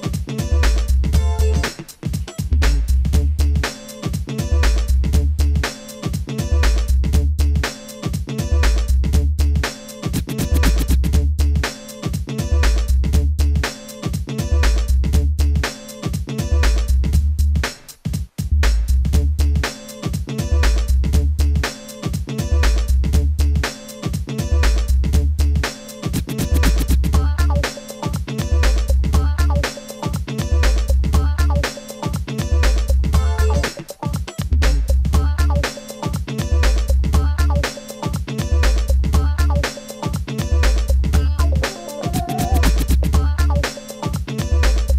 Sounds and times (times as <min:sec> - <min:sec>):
Music: 0:00.0 - 0:44.9.